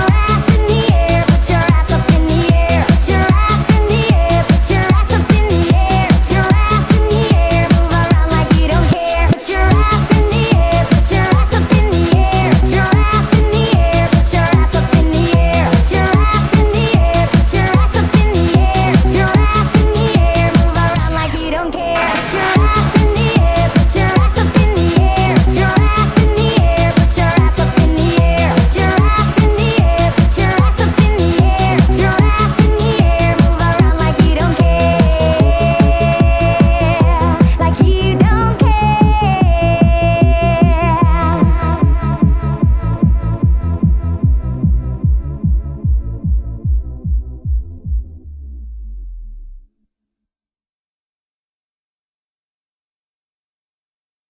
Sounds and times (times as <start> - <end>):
Music: 0.0 - 50.1.